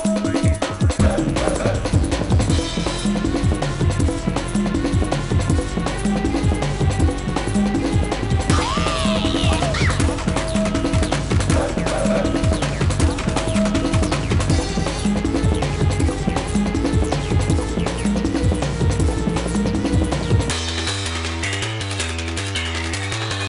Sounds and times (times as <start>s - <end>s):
Music: 0.0s - 23.4s.